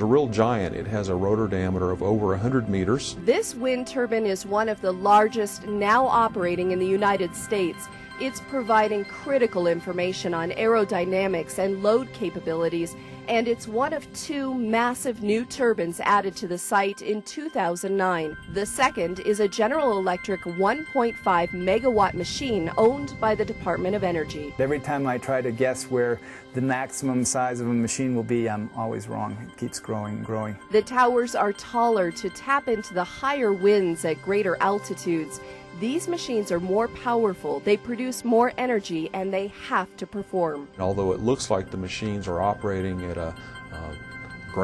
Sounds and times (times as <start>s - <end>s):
Music: 0.0s - 44.6s.